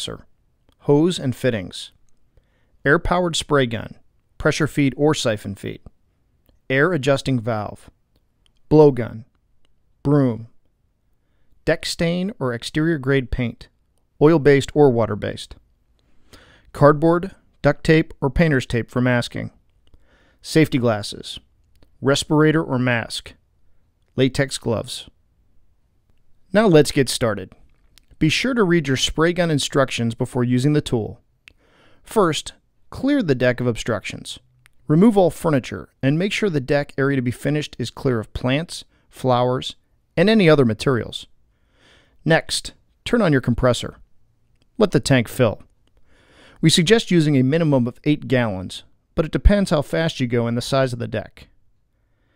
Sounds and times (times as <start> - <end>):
Speech: 0.0 - 2.0, 2.8 - 5.9, 6.7 - 8.0, 8.7 - 9.4, 10.0 - 10.6, 11.6 - 15.6, 16.7 - 19.6, 20.4 - 23.4, 24.2 - 25.2, 26.5 - 27.6, 28.2 - 31.2, 32.1 - 41.3, 42.2 - 44.1, 44.8 - 45.7, 46.6 - 51.6.